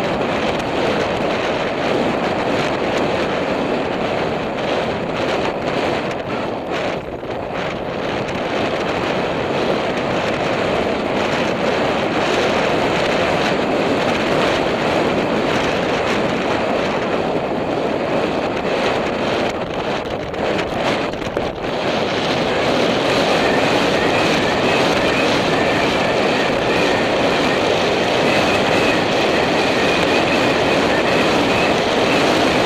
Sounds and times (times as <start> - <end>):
Clip-clop: 0.0 - 32.6.